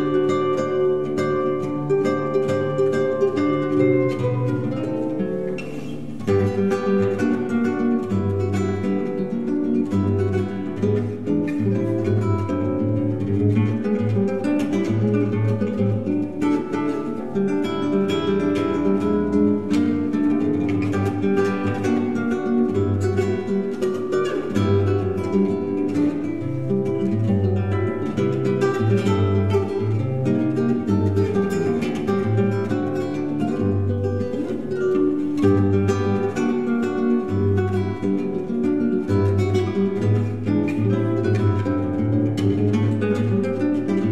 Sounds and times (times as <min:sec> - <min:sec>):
Music: 0:00.0 - 0:44.1.